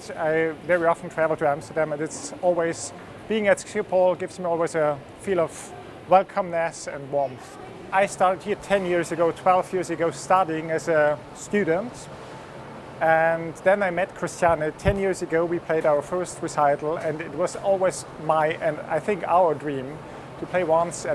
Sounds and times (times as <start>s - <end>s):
Speech: 0.0s - 12.1s, 13.0s - 21.1s.